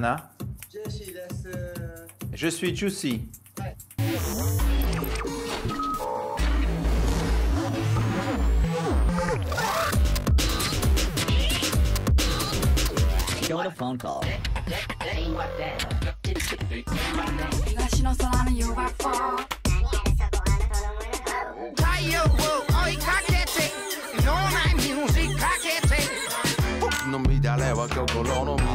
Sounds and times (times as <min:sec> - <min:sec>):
Speech: 0:00.0 - 0:03.8, 0:13.5 - 0:14.3
Music: 0:00.0 - 0:28.7.